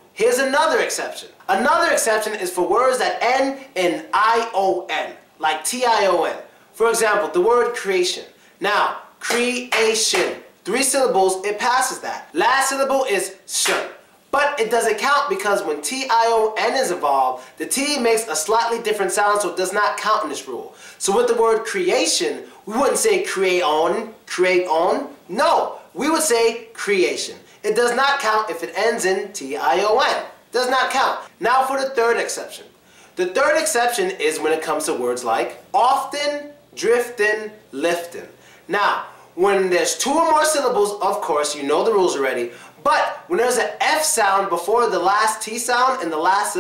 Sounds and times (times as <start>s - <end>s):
Speech: 0.2s - 46.6s.